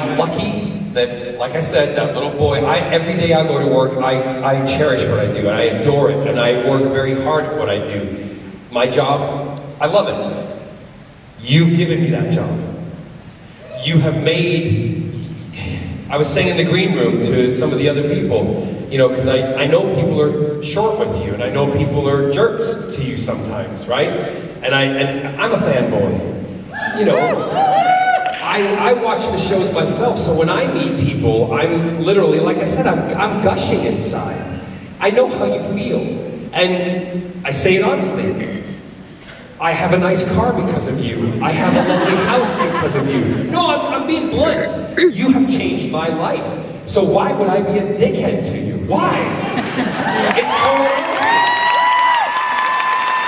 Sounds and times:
Speech: 0:00.0 - 0:10.3, 0:11.4 - 0:12.7, 0:13.8 - 0:14.9, 0:15.6 - 0:26.2, 0:26.8 - 0:27.5, 0:28.4 - 0:38.7, 0:39.6 - 0:49.5, 0:50.2 - 0:51.3.

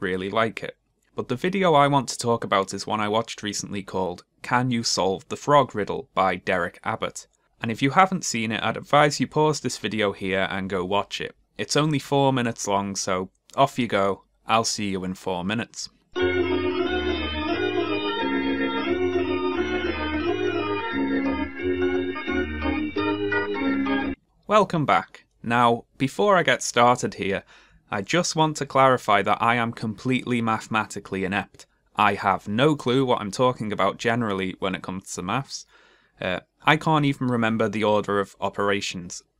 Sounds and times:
Speech: 0:00.0 - 0:15.9, 0:24.5 - 0:39.3.

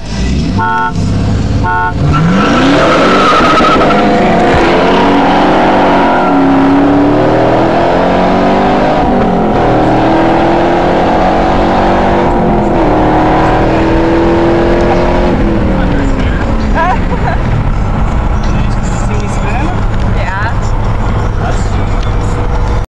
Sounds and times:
Car: 0:00.0 - 0:22.9
Speech: 0:18.4 - 0:22.5.

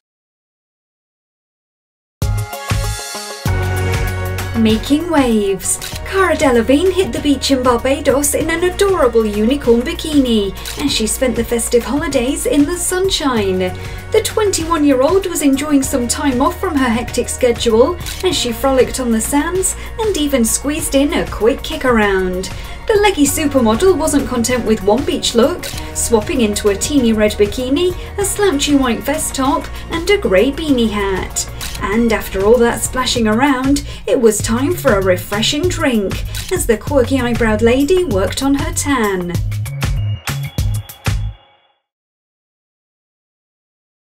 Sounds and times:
Music: 0:02.2 - 0:42.0
Speech: 0:04.6 - 0:39.4.

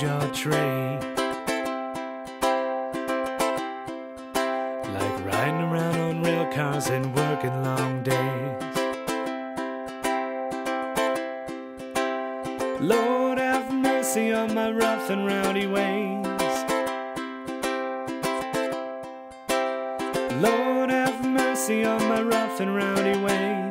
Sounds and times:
Music: 0:00.0 - 0:23.7.

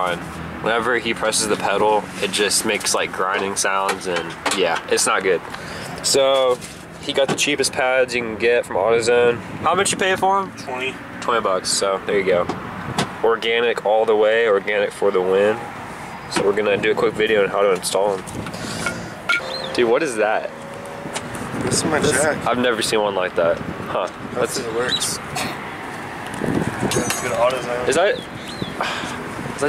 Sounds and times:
Car: 0:00.0 - 0:29.6.

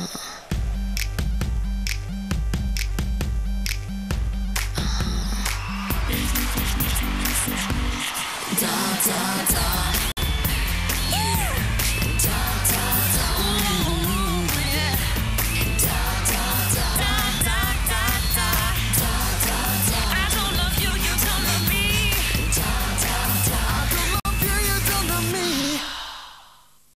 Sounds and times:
Music: 0:00.4 - 0:25.9.

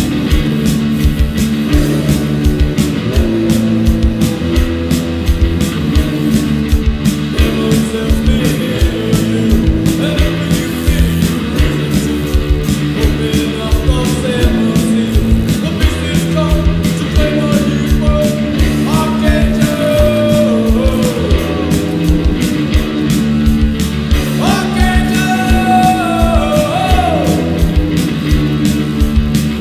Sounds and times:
Music: 0:00.0 - 0:29.6.

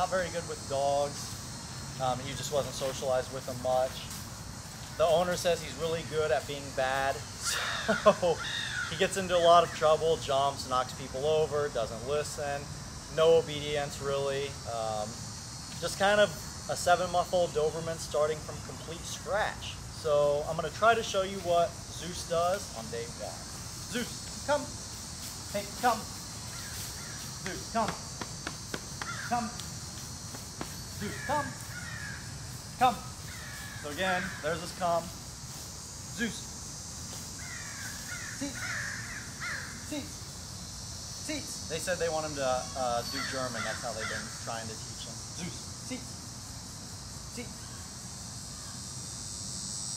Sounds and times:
Outside, rural or natural: 0:00.0 - 0:49.9
Caw: 0:07.5 - 0:09.1, 0:29.0 - 0:29.4, 0:31.2 - 0:32.3, 0:33.3 - 0:34.6, 0:37.4 - 0:39.8, 0:43.2 - 0:44.4.

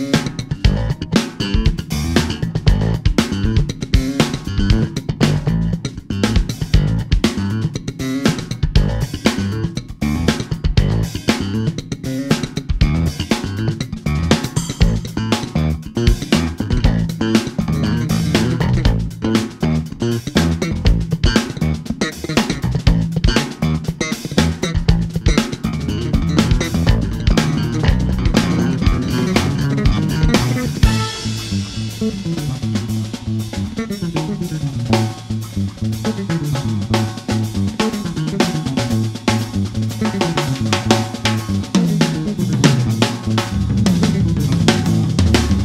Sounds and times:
Bass drum: 0:00.0 - 0:45.6
Drum kit: 0:00.0 - 0:45.6.

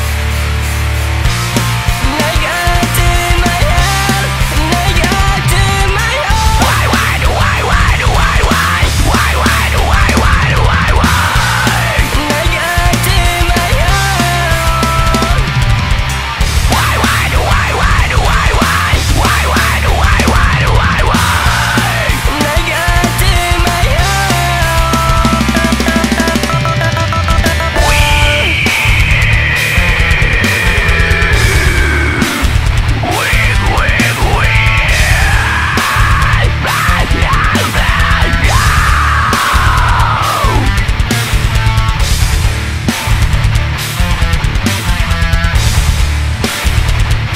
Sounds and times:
Angry music: 0:00.0 - 0:47.3.

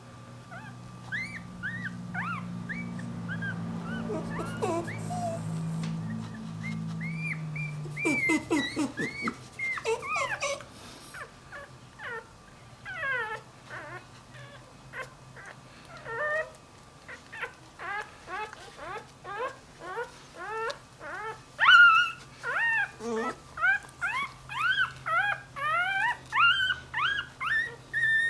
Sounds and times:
Dog: 0:00.5 - 0:28.2.

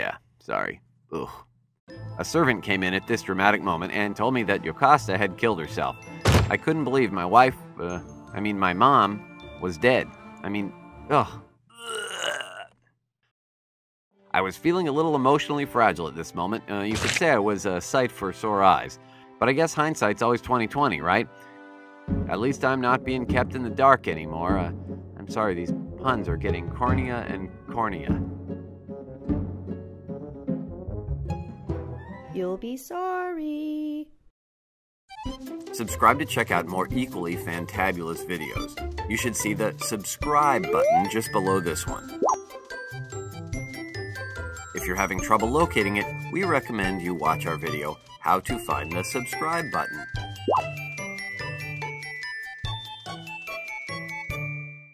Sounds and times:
Speech: 0:00.0 - 0:01.4, 0:02.2 - 0:11.4, 0:14.4 - 0:21.3, 0:22.3 - 0:28.2, 0:32.3 - 0:34.1, 0:35.8 - 0:42.0, 0:44.8 - 0:50.0
Music: 0:01.9 - 0:11.6, 0:14.1 - 0:33.0, 0:35.1 - 0:54.9.

